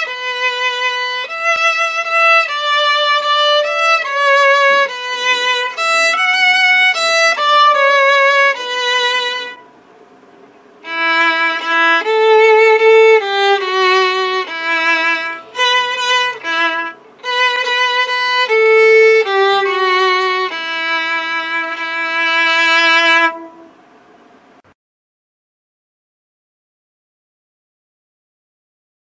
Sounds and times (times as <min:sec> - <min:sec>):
Violin, fiddle: 0:00.0 - 0:09.7, 0:10.8 - 0:23.7.